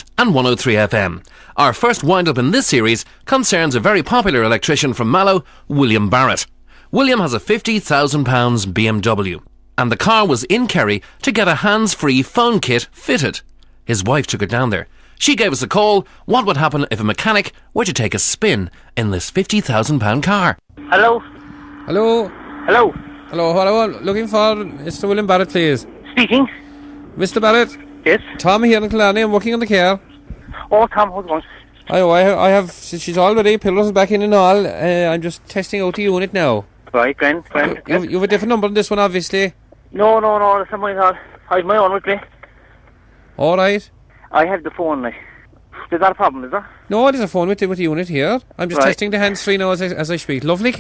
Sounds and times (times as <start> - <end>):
Speech: 0.0 - 21.2, 21.9 - 26.6, 27.2 - 30.0, 30.6 - 42.3, 45.9 - 50.8.